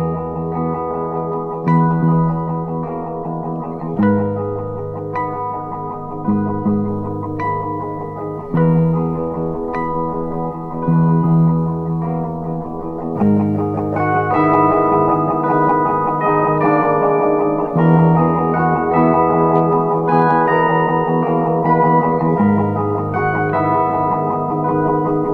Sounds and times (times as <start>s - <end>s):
Bass guitar: 0.0s - 25.3s.